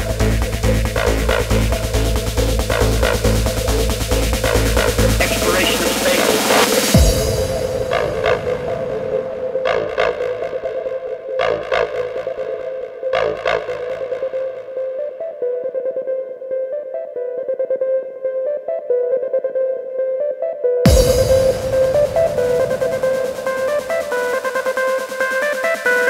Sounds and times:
Music: 0.0 - 26.0.

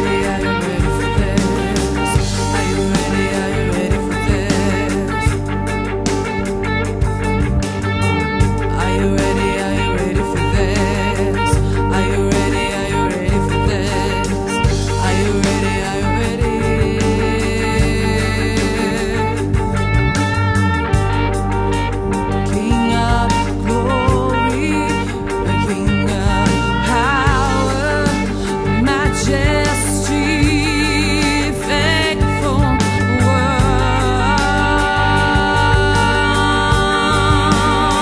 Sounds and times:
Music: 0.0 - 38.0.

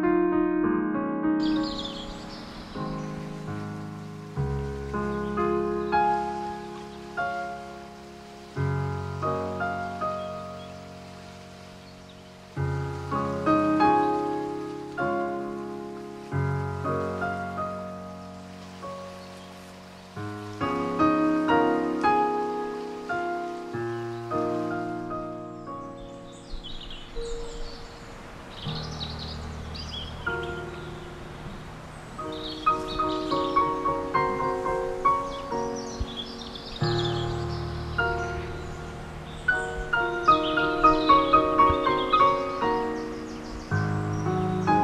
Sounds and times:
Music: 0.0 - 44.8.

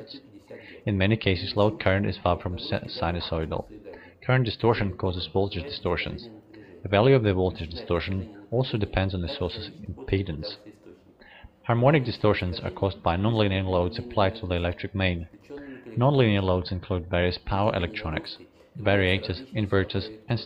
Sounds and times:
Speech: 0.0 - 20.4.

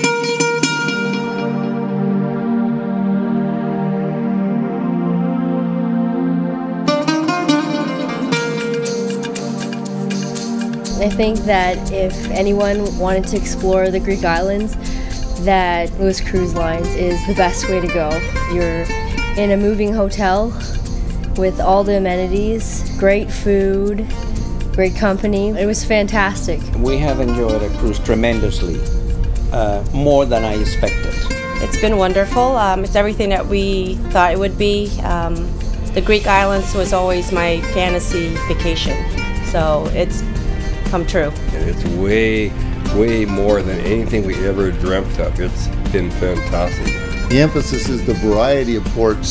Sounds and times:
Music: 0.0 - 49.3
Speech: 11.0 - 14.7, 21.4 - 24.0, 24.8 - 28.8, 29.6 - 38.9, 41.0 - 49.3.

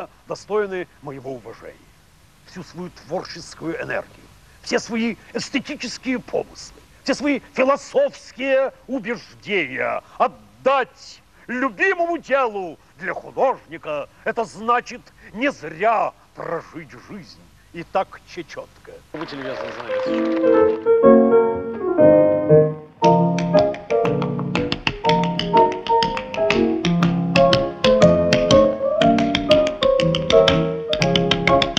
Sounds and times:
Speech: 0.0 - 1.9, 2.5 - 20.2
Music: 19.2 - 31.7.

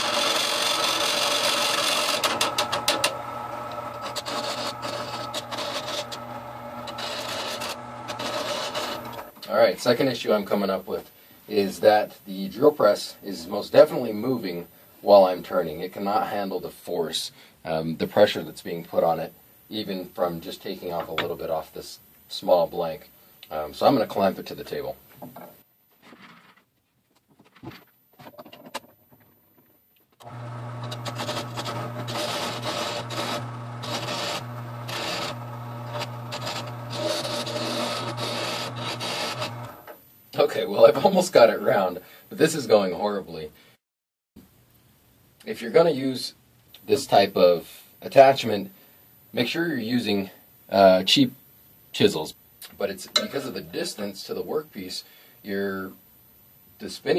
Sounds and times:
Wood: 0.0 - 9.3, 30.2 - 39.7
Speech: 9.4 - 25.0, 40.3 - 43.6, 45.4 - 56.0, 56.8 - 57.1.

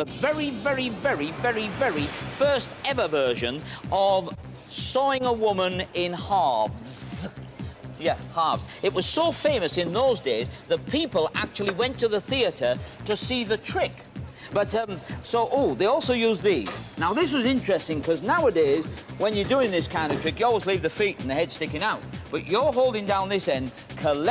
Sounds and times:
Speech: 0.0 - 7.3, 8.0 - 14.0, 14.6 - 24.3
Music: 0.0 - 24.3.

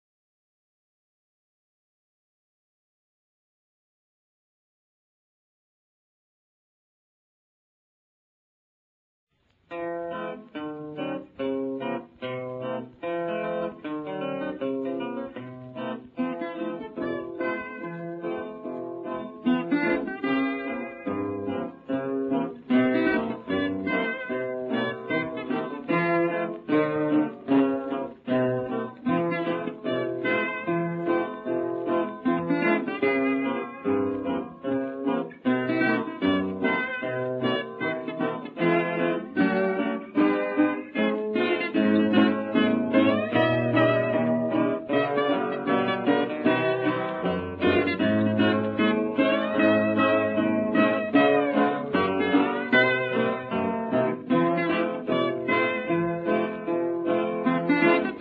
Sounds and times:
Music: 9.4 - 58.2.

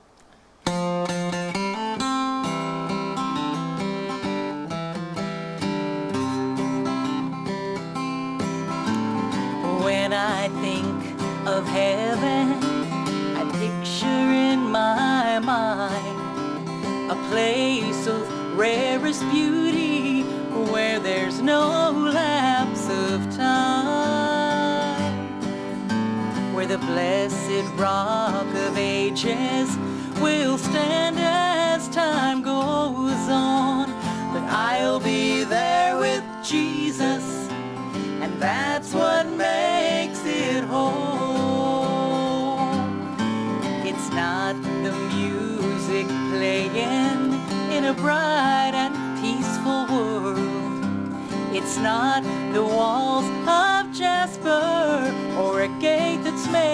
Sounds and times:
Country: 0.2 - 56.7.

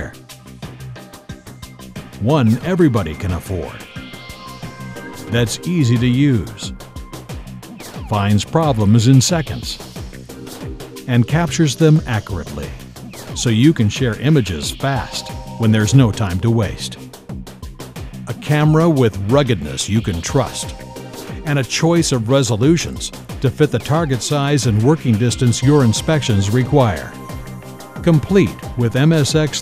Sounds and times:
Speech: 0.0 - 0.2, 2.2 - 3.9, 5.2 - 6.7, 8.1 - 9.8, 11.1 - 12.8, 13.4 - 17.0, 18.3 - 20.8, 21.4 - 27.2, 28.0 - 29.6
Music: 0.0 - 29.6.

